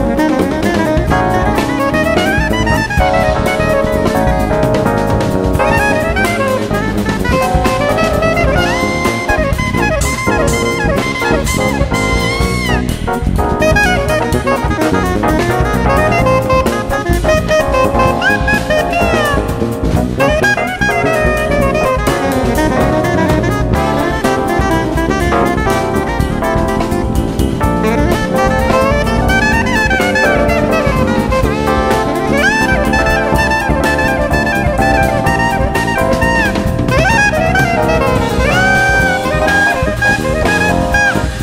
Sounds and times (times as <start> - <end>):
Brass instrument: 0.0 - 41.4
Drum: 0.0 - 41.4
Drum kit: 0.0 - 41.4
Jazz: 0.0 - 41.4
Saxophone: 0.0 - 41.4.